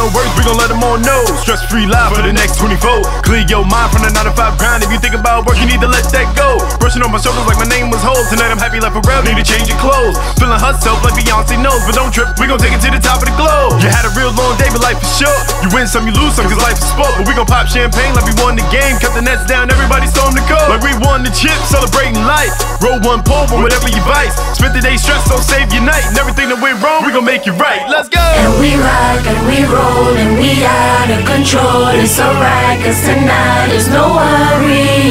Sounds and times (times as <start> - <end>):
Music: 0.0 - 35.1.